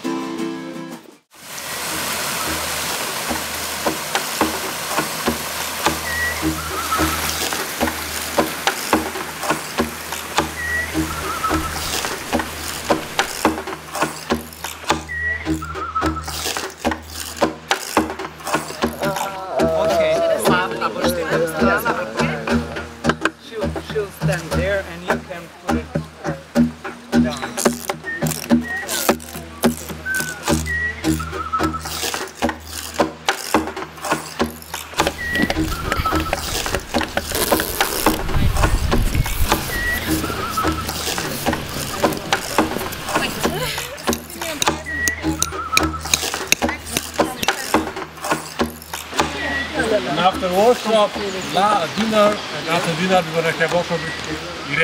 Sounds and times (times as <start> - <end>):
Music: 0.0 - 1.3, 1.9 - 52.0
Speech: 18.8 - 26.5, 41.8 - 45.2, 46.6 - 47.9, 49.2 - 54.8.